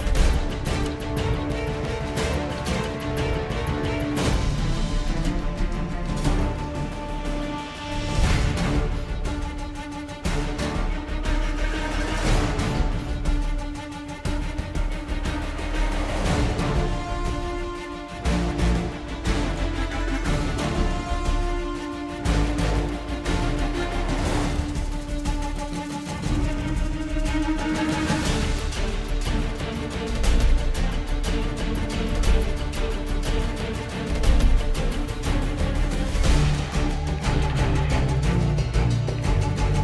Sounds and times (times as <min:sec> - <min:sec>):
Background music: 0:00.0 - 0:39.8
Independent music: 0:00.0 - 0:39.8.